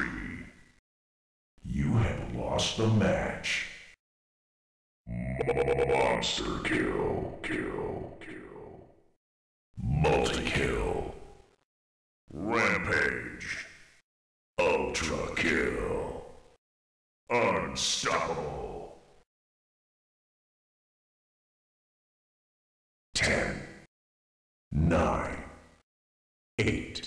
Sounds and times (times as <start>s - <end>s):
Speech: 0.0s - 0.6s, 1.6s - 3.8s, 5.1s - 8.8s, 9.8s - 11.3s, 12.3s - 13.7s, 14.6s - 16.3s, 17.3s - 19.0s, 23.2s - 23.7s, 24.7s - 25.6s, 26.6s - 27.0s.